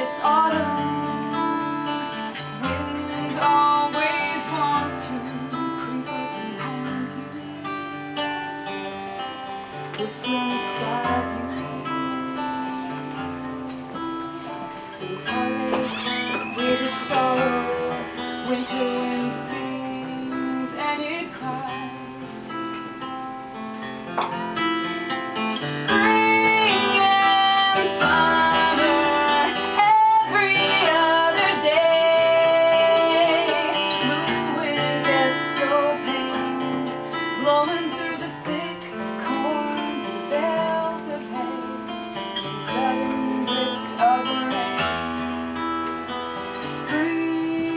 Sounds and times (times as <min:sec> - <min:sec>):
Music: 0:00.0 - 0:47.7.